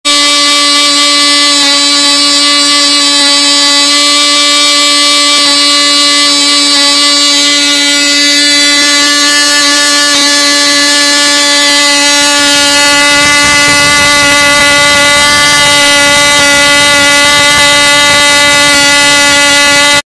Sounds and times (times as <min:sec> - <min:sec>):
Engine: 0:00.0 - 0:20.0.